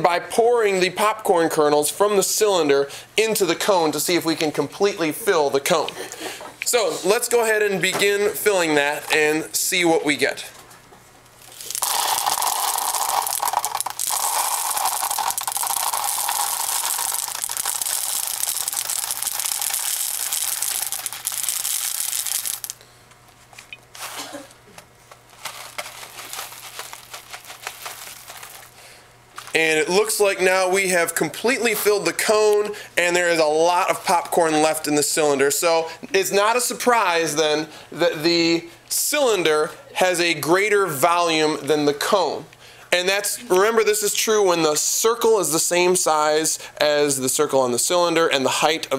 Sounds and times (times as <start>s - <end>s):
Speech: 0.0s - 6.0s, 6.6s - 10.6s, 29.6s - 48.9s.